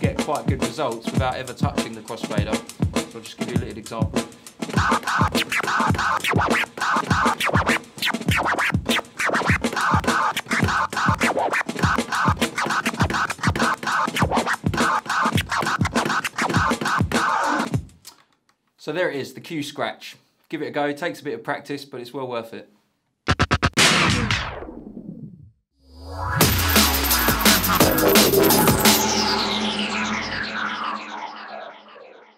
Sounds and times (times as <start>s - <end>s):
Speech: 0.0s - 4.2s, 18.8s - 22.8s
House music: 0.0s - 17.6s, 26.4s - 31.9s
Scratching (performance technique): 0.0s - 18.2s, 23.3s - 24.6s, 26.3s - 31.2s.